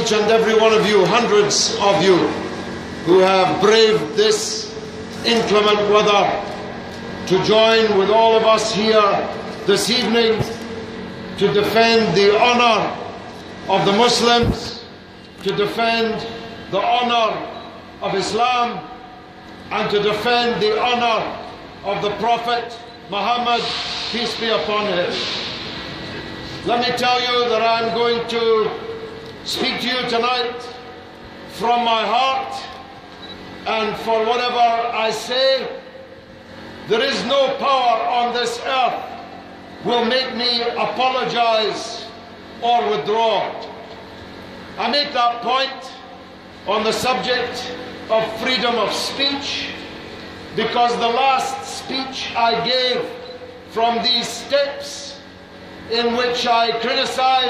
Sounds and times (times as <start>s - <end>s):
Male speech, man speaking: 0.0s - 2.4s, 3.1s - 6.5s, 7.3s - 10.6s, 11.4s - 13.0s, 13.7s - 18.9s, 19.7s - 25.2s, 26.6s - 30.8s, 31.6s - 32.8s, 33.7s - 35.8s, 36.9s - 39.2s, 39.8s - 43.7s, 44.8s - 46.1s, 46.7s - 49.8s, 50.6s - 55.2s, 55.9s - 57.5s.